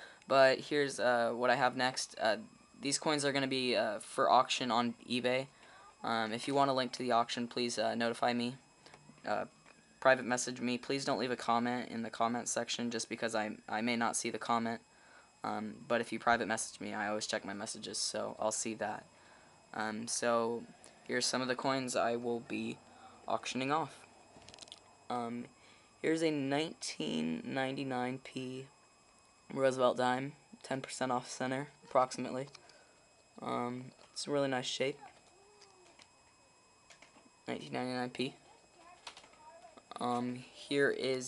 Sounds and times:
Inside, small room: 0:00.0 - 0:41.2
Speech: 0:00.3 - 0:08.6, 0:09.2 - 0:14.8, 0:15.4 - 0:19.1, 0:19.8 - 0:24.0, 0:25.1 - 0:28.7, 0:29.5 - 0:32.6, 0:33.4 - 0:35.2, 0:37.5 - 0:41.2.

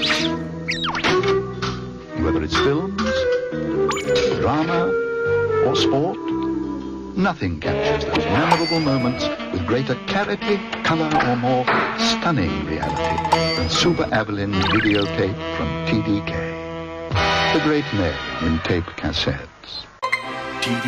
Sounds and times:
Music: 0:00.0 - 0:19.4, 0:20.0 - 0:20.8
Speech: 0:02.2 - 0:03.3, 0:04.2 - 0:04.9, 0:05.6 - 0:06.2, 0:07.2 - 0:12.9, 0:13.6 - 0:16.5, 0:17.5 - 0:19.9, 0:20.6 - 0:20.8.

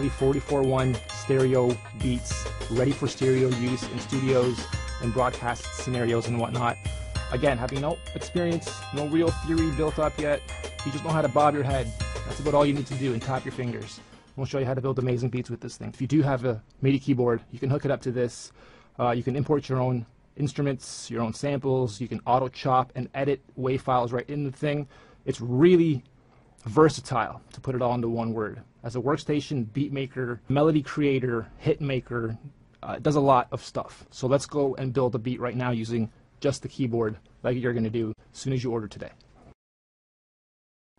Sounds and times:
Music: 0:00.0 - 0:15.2
Speech: 0:00.0 - 0:39.2.

